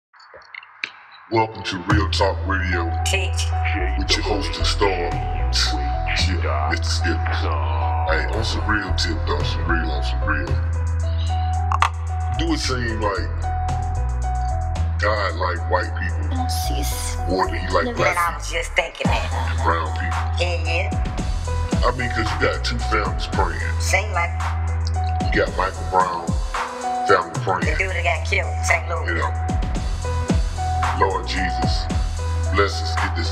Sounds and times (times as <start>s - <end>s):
Speech: 0.4s - 10.6s, 12.4s - 13.3s, 15.0s - 20.9s, 21.8s - 24.3s, 24.9s - 26.4s, 27.1s - 29.4s, 31.0s - 31.9s, 32.5s - 33.3s
Music: 0.4s - 33.3s.